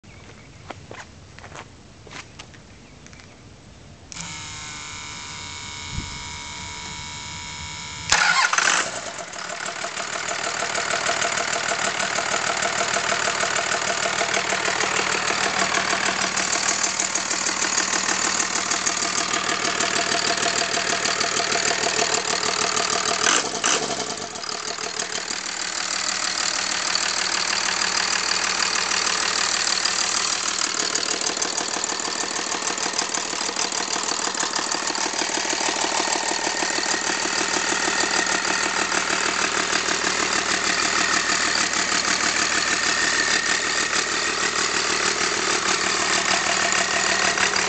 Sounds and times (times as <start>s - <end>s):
Engine: 0.0s - 47.6s.